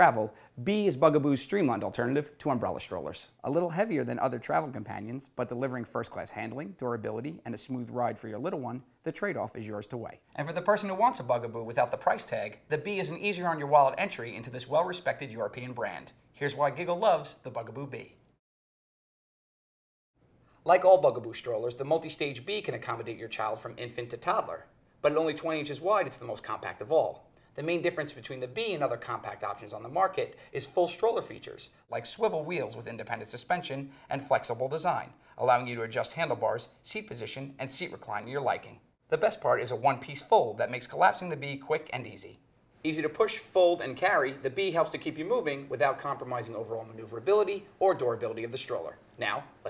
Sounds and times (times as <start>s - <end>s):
Speech: 0.0s - 18.2s, 20.6s - 49.6s.